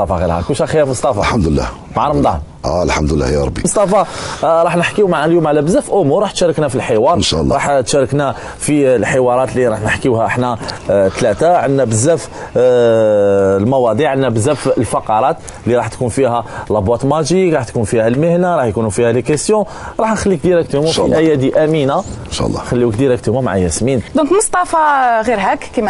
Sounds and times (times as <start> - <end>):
Speech: 0.0 - 25.9.